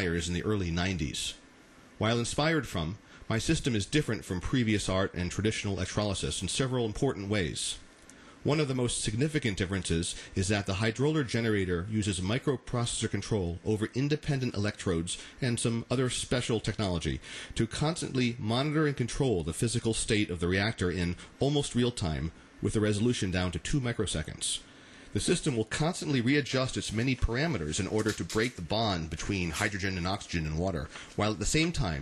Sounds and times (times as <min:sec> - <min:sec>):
Speech: 0:00.0 - 0:01.4, 0:02.0 - 0:32.0.